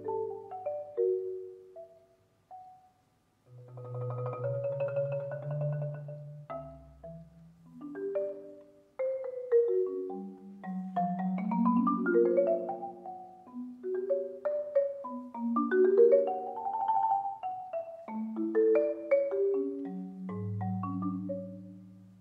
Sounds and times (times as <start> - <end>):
Marimba, xylophone: 0.0 - 22.2.